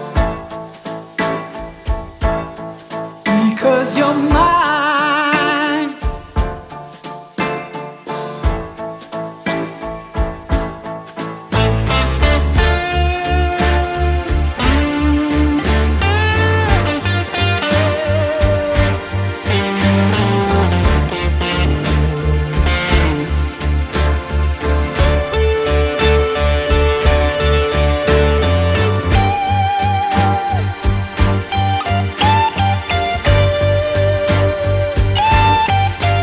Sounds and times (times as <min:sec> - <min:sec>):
Steel guitar, slide guitar: 0:11.5 - 0:36.2.